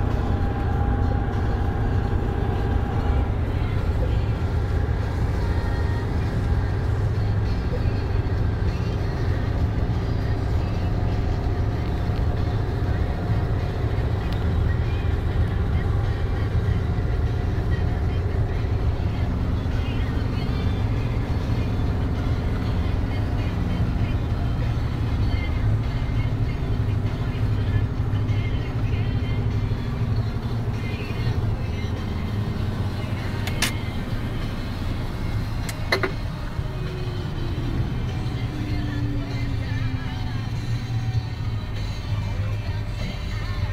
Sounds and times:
Music: 0:00.0 - 0:43.7
Vehicle: 0:00.0 - 0:43.7.

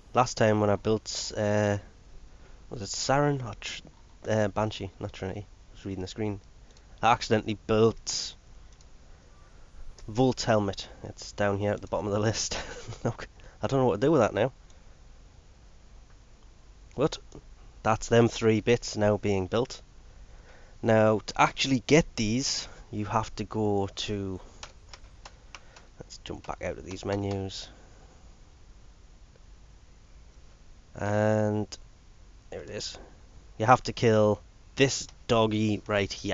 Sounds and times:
Computer keyboard: 0:24.6 - 0:27.4.

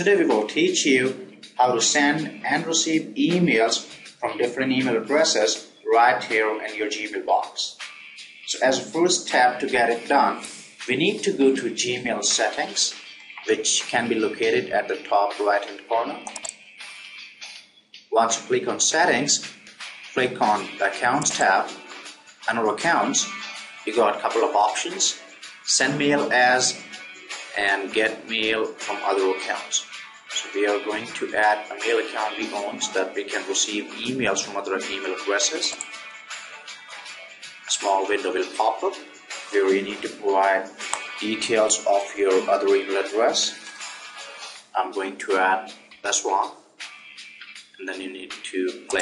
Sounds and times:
Speech: 0:00.0 - 0:07.8, 0:08.5 - 0:16.3, 0:18.2 - 0:19.5, 0:20.2 - 0:21.8, 0:22.5 - 0:26.9, 0:27.5 - 0:35.8, 0:37.7 - 0:43.6, 0:44.8 - 0:46.6, 0:47.8 - 0:49.0
Music: 0:00.0 - 0:49.0.

